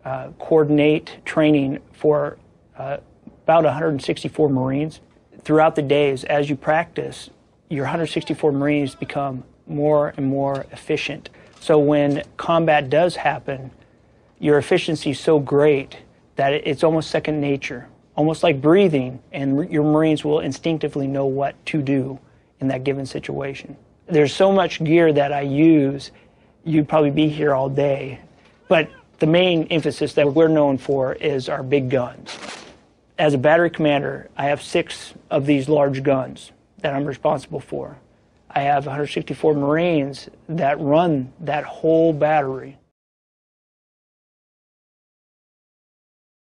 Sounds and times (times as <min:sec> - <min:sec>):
Speech: 0:00.0 - 0:13.8, 0:14.4 - 0:32.3, 0:33.2 - 0:42.9.